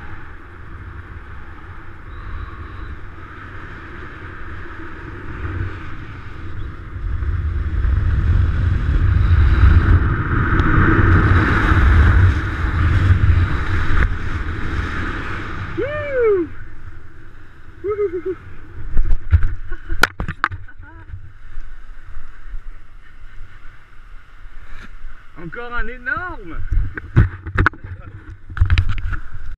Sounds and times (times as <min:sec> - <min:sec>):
Stream: 0:09.3 - 0:29.5
Speech: 0:25.4 - 0:26.7.